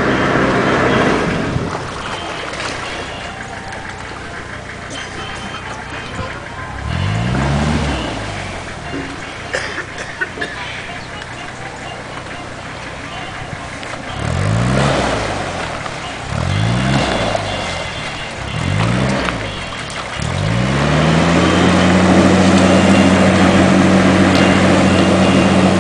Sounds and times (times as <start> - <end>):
Speech: 2.0 - 8.2, 10.4 - 14.5.